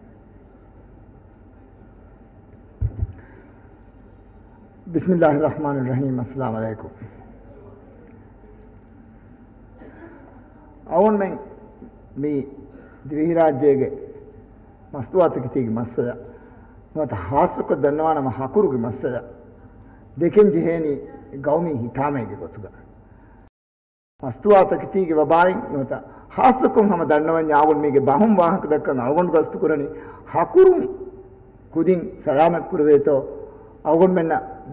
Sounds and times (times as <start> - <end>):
Narration, monologue: 2.4 - 7.3, 10.8 - 23.5, 24.2 - 34.7
Male speech, man speaking: 4.9 - 7.0, 10.9 - 11.6, 12.2 - 14.1, 14.9 - 16.2, 17.0 - 19.4, 20.2 - 22.8, 24.2 - 31.0, 31.8 - 34.7.